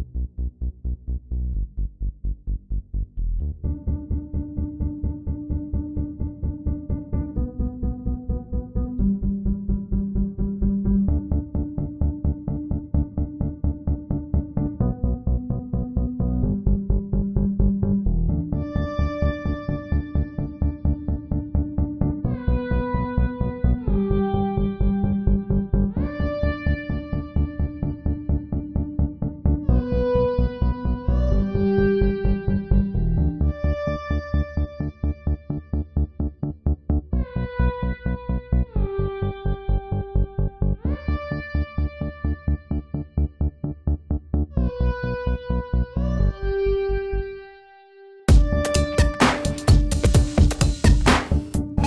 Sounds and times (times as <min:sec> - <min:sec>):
Music: 0:00.0 - 0:51.8.